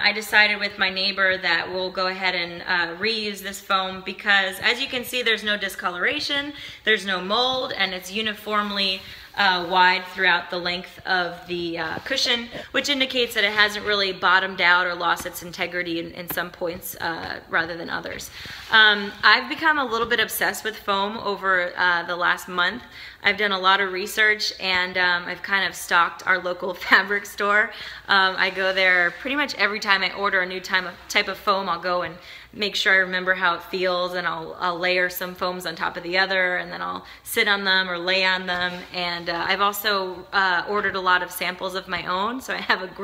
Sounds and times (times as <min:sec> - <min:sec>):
Speech: 0:00.0 - 0:43.0.